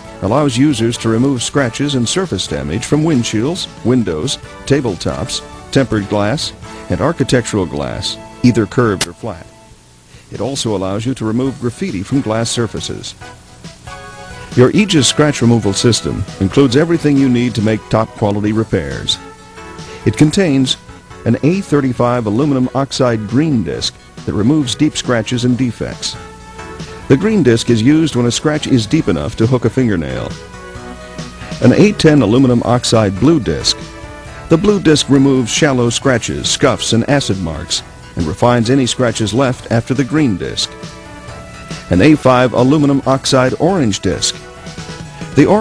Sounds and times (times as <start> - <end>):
Music: 0.0 - 45.6
Speech: 0.2 - 9.5, 10.3 - 13.2, 14.6 - 19.2, 20.0 - 26.2, 27.1 - 30.4, 31.6 - 33.8, 34.5 - 40.8, 41.9 - 44.4, 45.4 - 45.6.